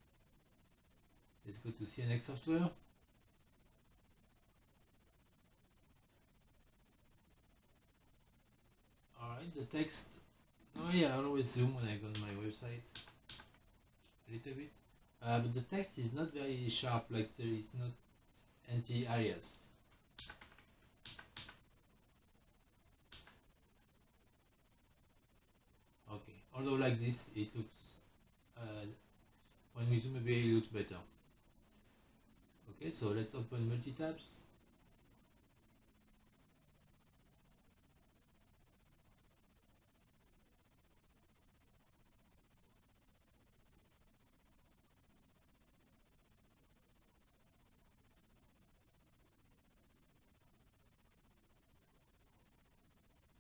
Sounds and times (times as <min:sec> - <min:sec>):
Inside, small room: 0:00.0 - 0:53.4
Speech: 0:01.4 - 0:02.8, 0:09.2 - 0:10.2, 0:10.8 - 0:13.0, 0:14.2 - 0:18.0, 0:18.7 - 0:19.7, 0:26.1 - 0:28.0, 0:28.6 - 0:29.0, 0:29.8 - 0:31.1, 0:32.7 - 0:34.5.